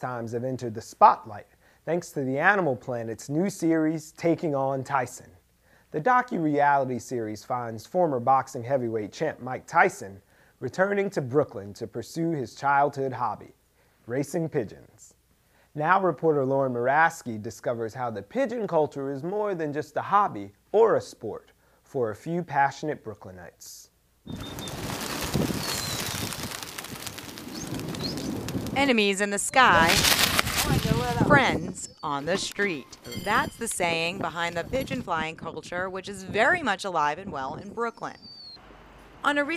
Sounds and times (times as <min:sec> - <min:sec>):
Speech: 0:00.0 - 0:15.2, 0:15.8 - 0:23.9, 0:28.8 - 0:30.0, 0:30.6 - 0:38.2, 0:39.2 - 0:39.5
Bird: 0:24.3 - 0:28.4, 0:38.1 - 0:38.6.